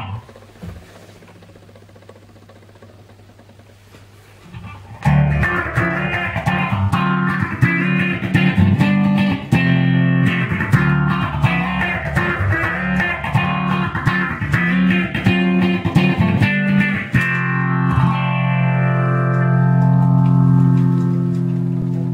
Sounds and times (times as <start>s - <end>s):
Guitar: 0.0s - 1.0s, 3.8s - 22.1s
Distortion: 0.0s - 22.1s
Effects unit: 0.0s - 22.1s.